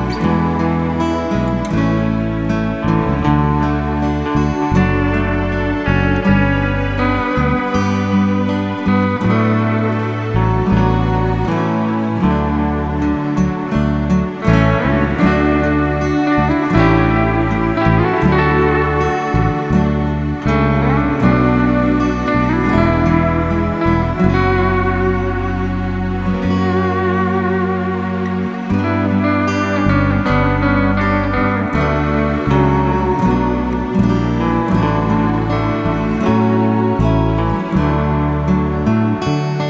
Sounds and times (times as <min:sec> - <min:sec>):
Steel guitar, slide guitar: 0:00.0 - 0:39.7.